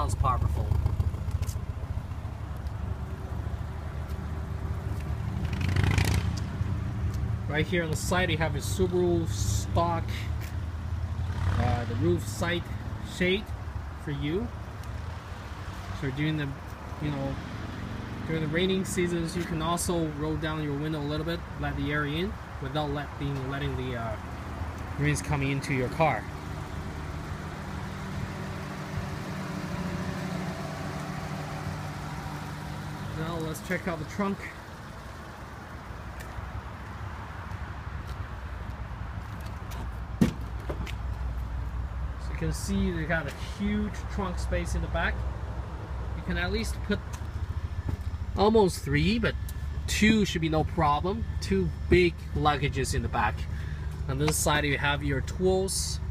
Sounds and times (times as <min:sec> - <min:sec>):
Speech: 0:00.0 - 0:00.8, 0:07.5 - 0:10.3, 0:11.6 - 0:14.5, 0:16.0 - 0:17.4, 0:18.3 - 0:24.2, 0:25.0 - 0:26.3, 0:33.1 - 0:34.6, 0:42.2 - 0:45.2, 0:46.2 - 0:47.1, 0:48.4 - 0:53.5, 0:54.1 - 0:56.1
Outside, urban or manmade: 0:00.0 - 0:56.1
Vehicle: 0:00.0 - 0:56.1.